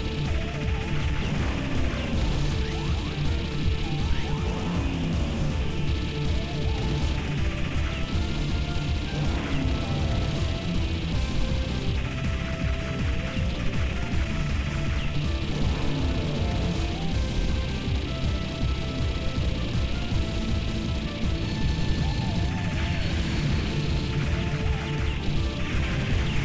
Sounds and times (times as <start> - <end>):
Music: 0.0 - 26.4.